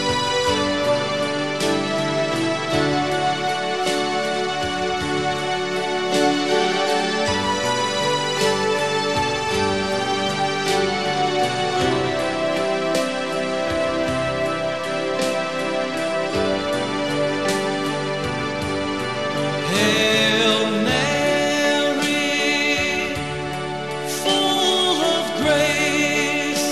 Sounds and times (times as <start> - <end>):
Music: 0.0 - 26.7.